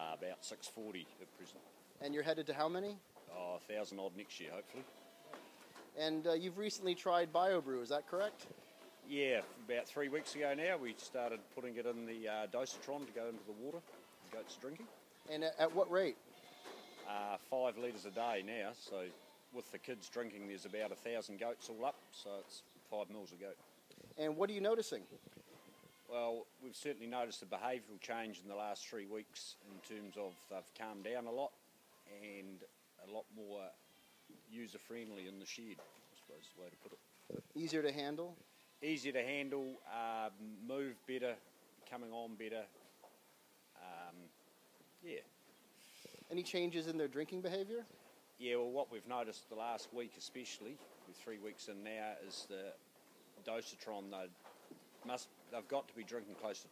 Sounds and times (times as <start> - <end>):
Speech: 0.0 - 4.9, 6.0 - 8.5, 9.1 - 16.2, 17.1 - 23.6, 24.2 - 25.1, 26.1 - 33.8, 34.5 - 37.0, 37.6 - 42.7, 43.8 - 44.3, 45.0 - 45.3, 46.3 - 52.8, 53.4 - 54.4, 55.0 - 56.7
Bleat: 4.6 - 5.6, 8.0 - 9.2, 16.2 - 21.0, 21.8 - 22.4, 25.0 - 26.2, 29.6 - 30.7, 31.9 - 32.5, 33.7 - 34.4, 36.2 - 37.0, 38.4 - 40.2.